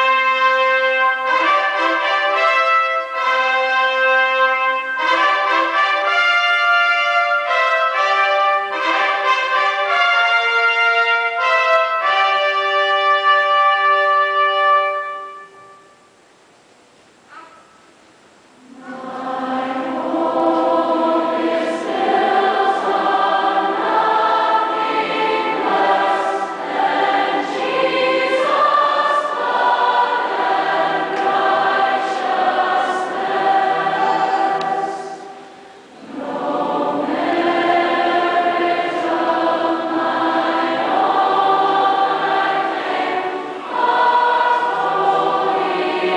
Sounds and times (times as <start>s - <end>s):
Music: 0.0s - 16.3s, 18.6s - 46.1s
Speech: 17.3s - 17.8s, 33.9s - 35.2s.